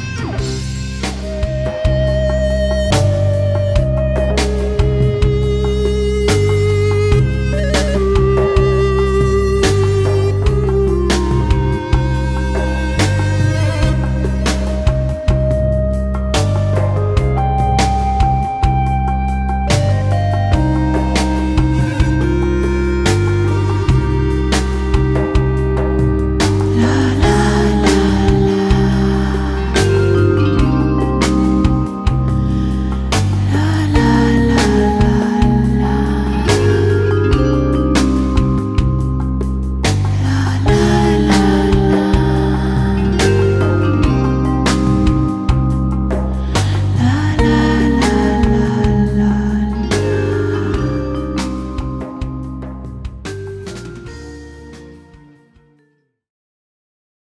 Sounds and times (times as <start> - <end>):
Music: 0.0 - 56.3.